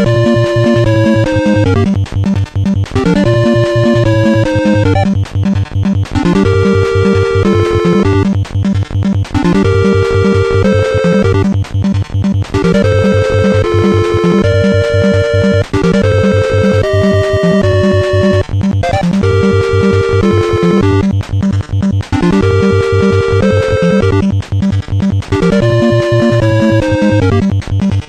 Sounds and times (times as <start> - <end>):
Music: 0.0 - 28.0.